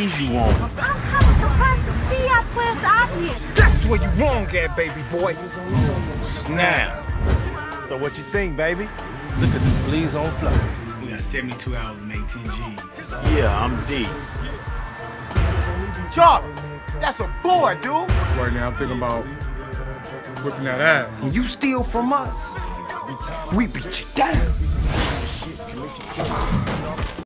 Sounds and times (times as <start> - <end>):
Speech: 0.0 - 2.0, 7.9 - 14.2, 23.2 - 24.8
Music: 0.0 - 27.2.